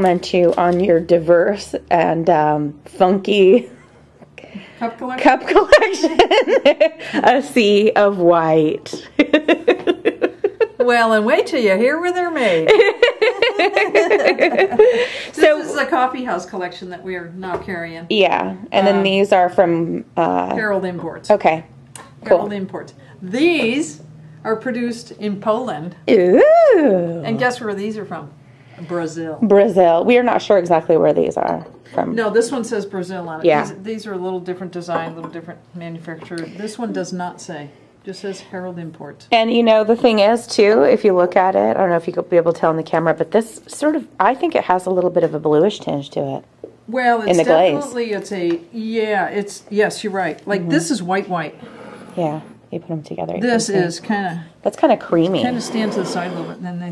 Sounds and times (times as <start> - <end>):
Laughter: 5.5 - 7.2, 9.2 - 10.9, 12.5 - 15.1.